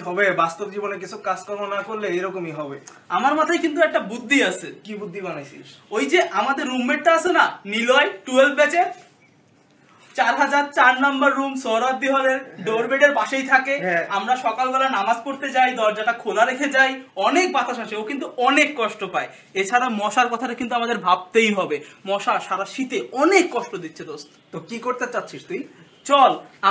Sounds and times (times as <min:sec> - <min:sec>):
Speech: 0:00.0 - 0:09.1, 0:10.2 - 0:26.7.